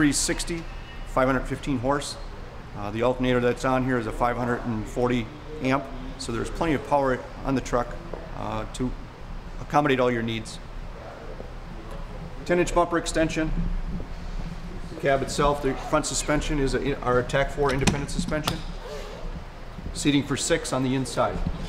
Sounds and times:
Speech: 0.0s - 0.6s, 1.2s - 9.0s, 9.6s - 10.6s, 12.4s - 13.6s, 14.9s - 18.6s, 20.0s - 21.5s.

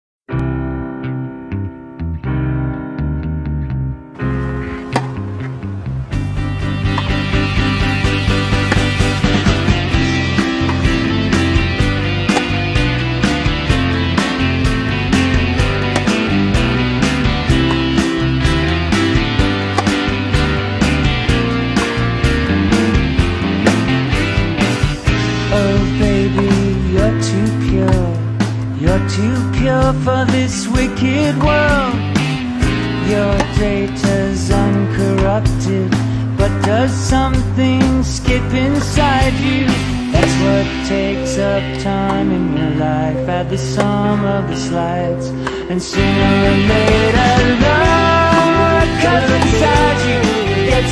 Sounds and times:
Psychedelic rock: 3.6s - 50.9s.

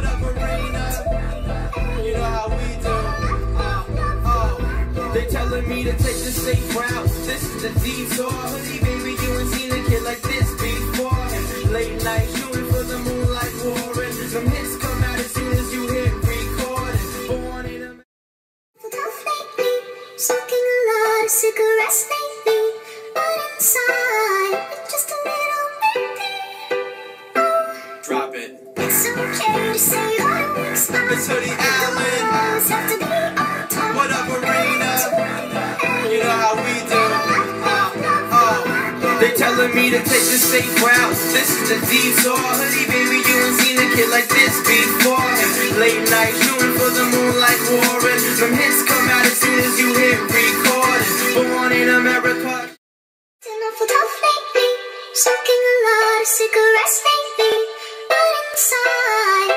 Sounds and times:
Music: 0.0s - 18.1s, 18.8s - 52.8s, 53.4s - 59.5s.

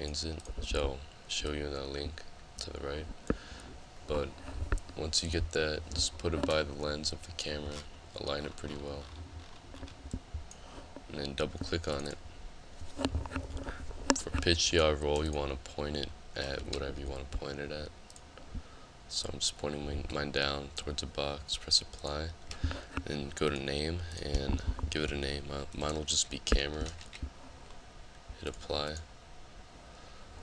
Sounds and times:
Speech: 0.0s - 3.1s, 4.1s - 4.3s, 5.0s - 9.1s, 11.1s - 12.2s, 14.4s - 17.9s, 19.1s - 22.4s, 23.0s - 27.0s, 28.4s - 29.1s.

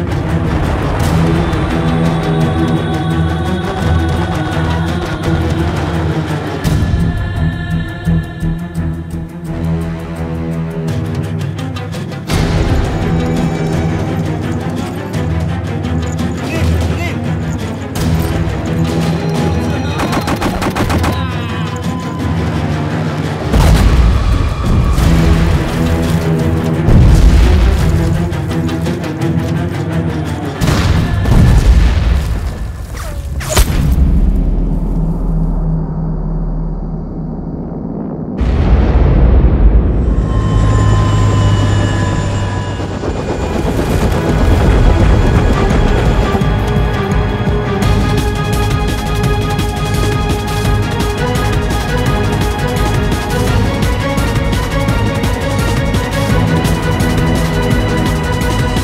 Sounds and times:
Music: 0.0s - 58.8s
Speech: 16.5s - 17.2s, 19.5s - 21.8s.

